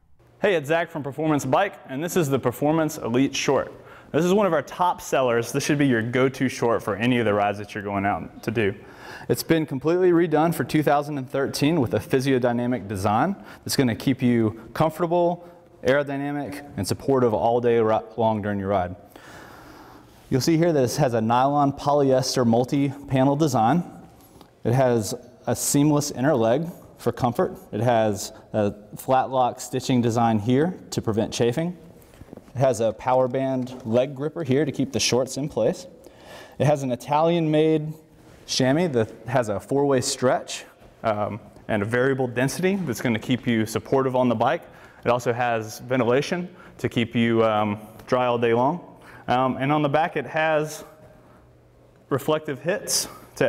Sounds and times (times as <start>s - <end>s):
Speech: 0.4s - 19.0s, 20.3s - 24.0s, 24.6s - 31.8s, 32.6s - 36.0s, 36.6s - 51.0s, 52.1s - 53.4s.